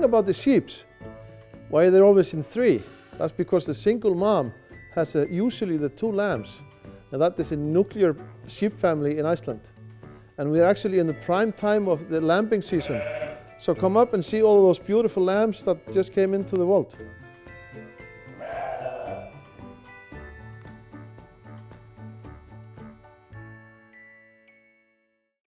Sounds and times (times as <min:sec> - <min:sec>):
Speech: 0:00.0 - 0:00.8, 0:01.8 - 0:06.6, 0:07.2 - 0:09.6, 0:10.4 - 0:13.0, 0:13.6 - 0:17.0
Music: 0:00.0 - 0:25.4
Sheep: 0:12.7 - 0:13.4, 0:18.4 - 0:19.4.